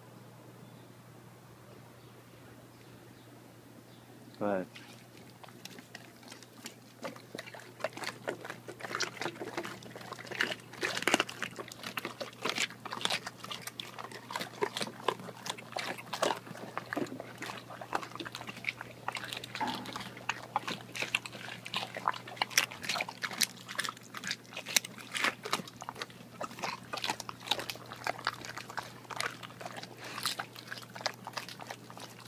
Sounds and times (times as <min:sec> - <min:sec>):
Water: 0:04.4 - 0:32.2.